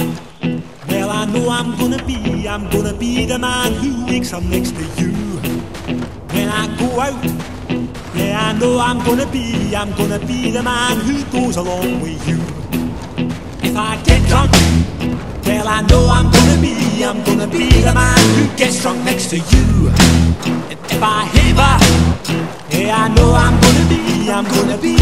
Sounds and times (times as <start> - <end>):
Music: 0.0 - 25.0.